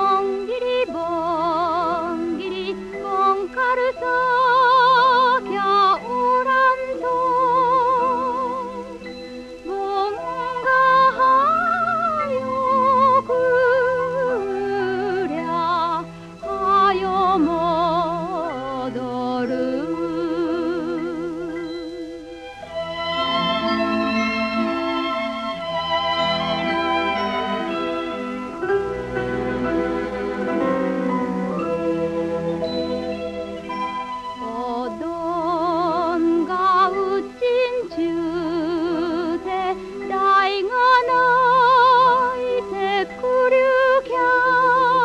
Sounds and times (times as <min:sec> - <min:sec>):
Lullaby: 0:00.0 - 0:45.0.